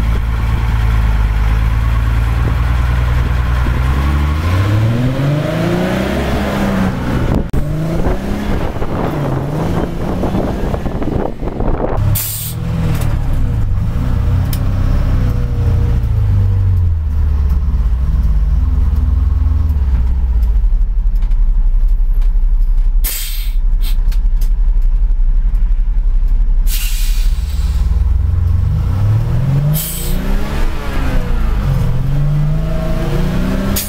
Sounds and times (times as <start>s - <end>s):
Heavy engine (low frequency): 0.0s - 33.8s
Vehicle: 0.0s - 33.8s
Accelerating, revving, vroom: 2.0s - 16.9s, 27.5s - 33.8s.